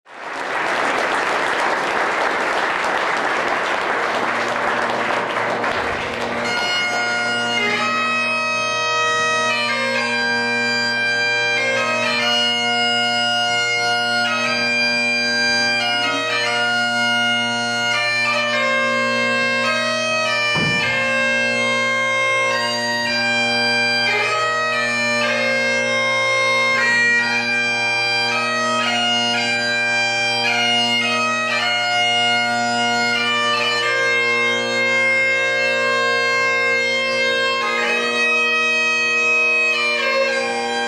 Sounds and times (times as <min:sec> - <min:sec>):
Bagpipes: 0:00.8 - 0:40.8
Wind instrument, woodwind instrument: 0:04.5 - 0:38.8.